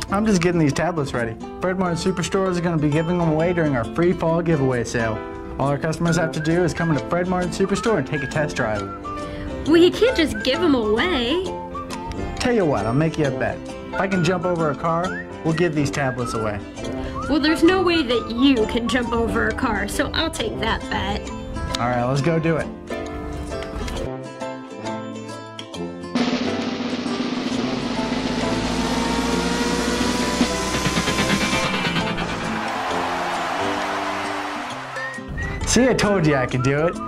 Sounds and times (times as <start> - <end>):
Music: 0.0 - 37.0.